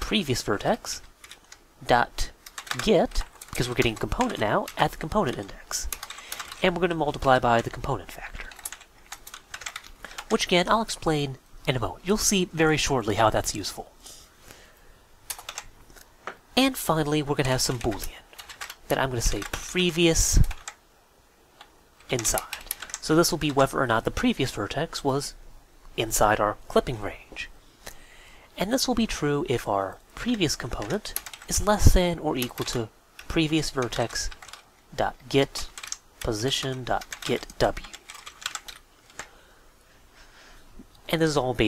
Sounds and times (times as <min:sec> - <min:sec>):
Speech: 0:00.0 - 0:01.1, 0:01.8 - 0:06.0, 0:06.6 - 0:08.6, 0:10.3 - 0:14.0, 0:16.6 - 0:18.2, 0:18.9 - 0:20.6, 0:22.1 - 0:25.4, 0:26.0 - 0:27.6, 0:28.6 - 0:38.0, 0:41.0 - 0:41.6
Typing: 0:01.2 - 0:01.6, 0:02.4 - 0:10.4, 0:15.3 - 0:15.7, 0:17.5 - 0:19.6, 0:20.2 - 0:20.8, 0:21.6 - 0:23.6, 0:30.7 - 0:31.8, 0:32.4 - 0:34.7, 0:35.4 - 0:39.3.